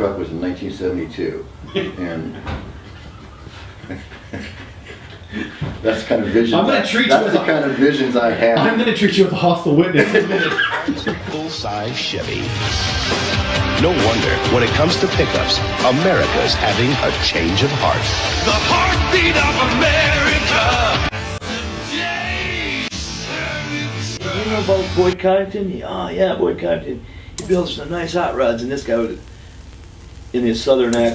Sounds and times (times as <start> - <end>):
Speech: 0.0 - 2.4, 5.8 - 12.5, 13.8 - 18.0, 24.3 - 29.2, 30.3 - 31.1
Music: 11.0 - 25.2.